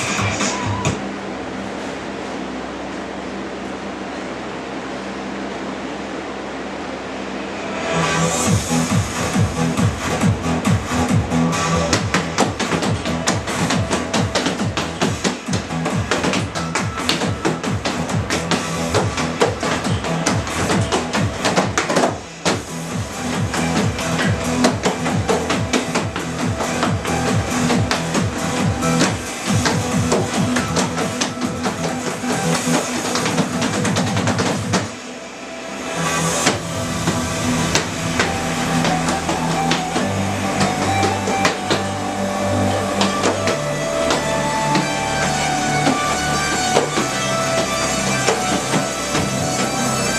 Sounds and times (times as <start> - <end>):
Music: 0.0 - 2.8, 7.1 - 50.1.